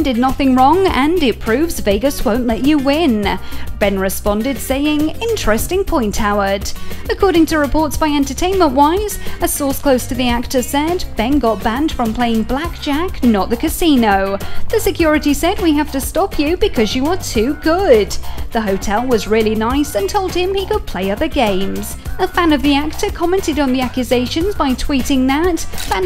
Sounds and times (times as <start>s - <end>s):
Music: 0.0s - 26.0s
Speech: 0.0s - 26.0s.